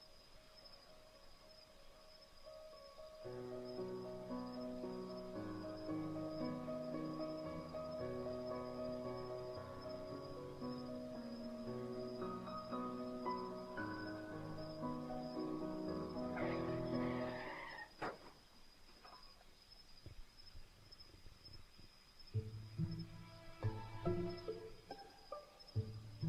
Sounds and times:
Music: 0:02.5 - 0:17.4, 0:22.4 - 0:26.2.

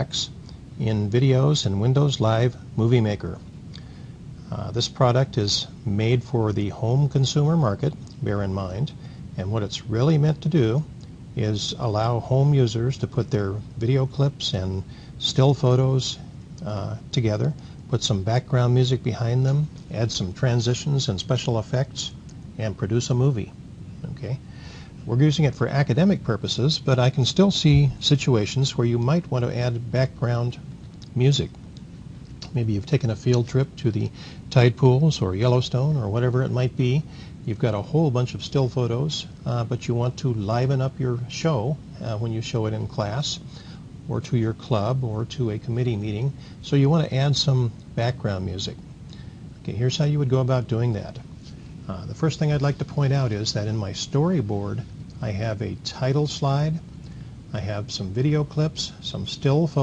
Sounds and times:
Speech: 0:00.0 - 0:03.5, 0:04.4 - 0:31.6, 0:32.4 - 0:43.5, 0:44.1 - 0:48.8, 0:49.6 - 0:51.3, 0:51.9 - 0:56.9, 0:57.5 - 0:59.8.

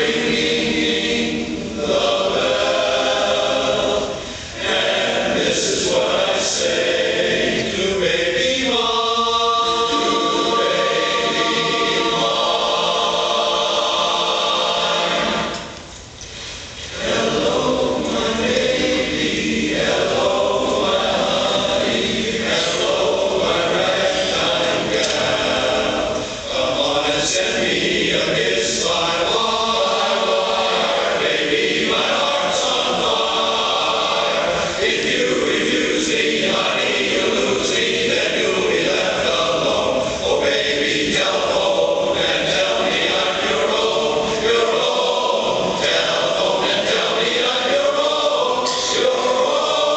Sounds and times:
Choir: 0:00.0 - 0:15.9, 0:16.8 - 0:49.9.

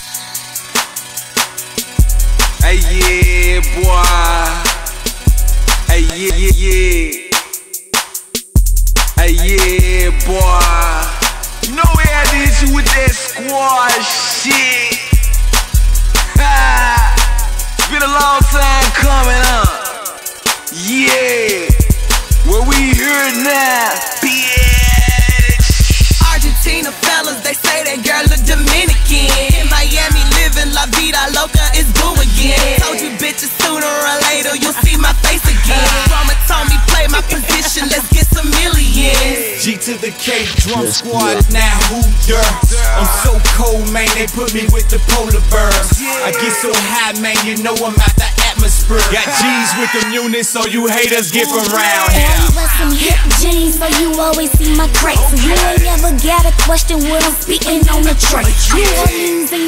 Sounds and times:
Soul music: 0:00.0 - 0:08.1, 0:08.9 - 0:59.6
Drum kit: 0:00.0 - 0:13.3, 0:14.4 - 0:39.6, 0:40.4 - 0:49.3, 0:50.7 - 0:59.4
Happy music: 0:00.0 - 0:59.6
Bass drum: 0:02.0 - 0:07.2, 0:08.0 - 0:13.2, 0:15.2 - 0:19.8, 0:21.7 - 0:23.0, 0:24.6 - 0:26.8, 0:28.3 - 0:33.0, 0:34.7 - 0:39.4, 0:40.6 - 0:46.0, 0:47.9 - 0:49.2, 0:52.1 - 0:59.2.

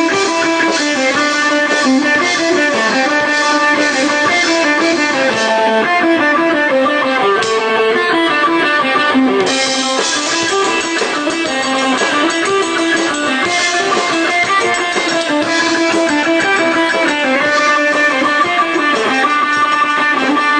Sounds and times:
Music: 0:00.0 - 0:20.5.

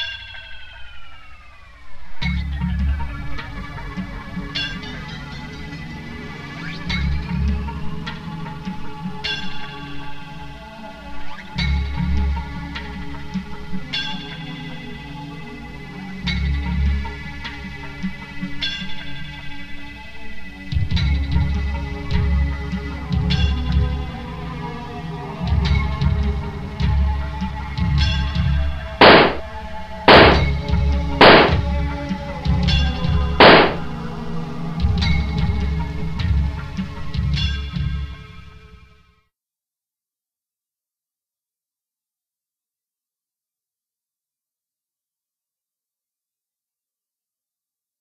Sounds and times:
Music: 0:00.0 - 0:39.3.

